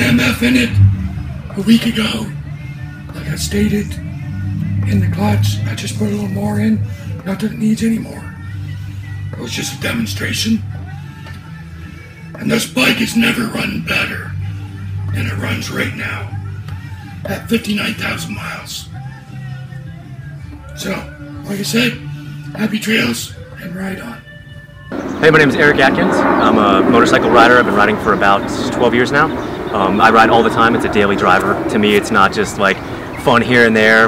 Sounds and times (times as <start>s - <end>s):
Speech: 0.0s - 0.8s, 1.5s - 2.4s, 25.2s - 34.0s.